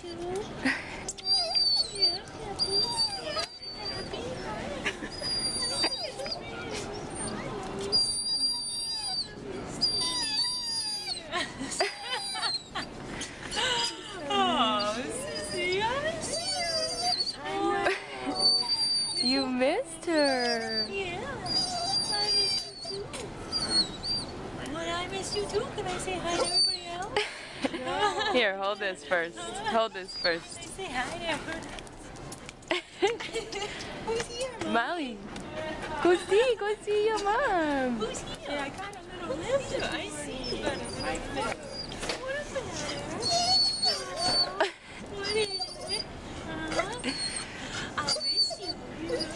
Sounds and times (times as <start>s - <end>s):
Speech: 14.0s - 21.4s.